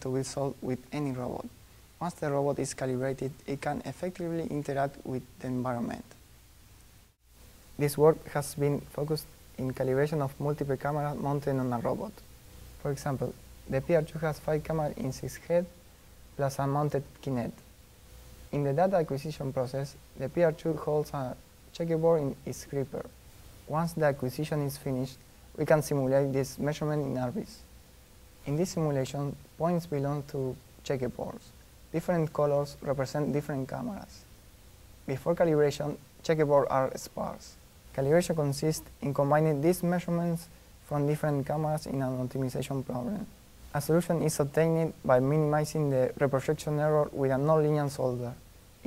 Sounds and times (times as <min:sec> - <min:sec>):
Speech: 0:00.0 - 0:06.2, 0:07.8 - 0:15.8, 0:16.4 - 0:17.7, 0:18.5 - 0:27.7, 0:28.4 - 0:34.3, 0:35.1 - 0:48.8.